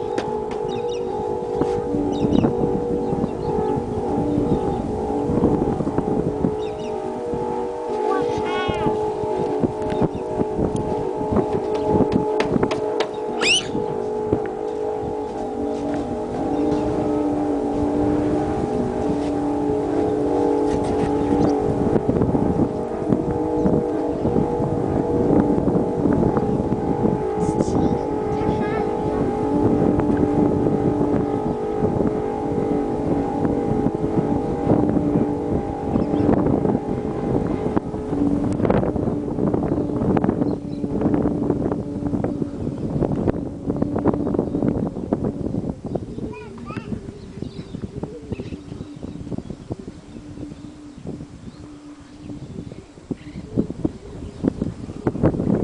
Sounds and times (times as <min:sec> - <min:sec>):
Wind noise (microphone): 0:00.0 - 0:55.6
Speech: 0:08.1 - 0:09.0, 0:27.4 - 0:29.3, 0:46.3 - 0:46.9.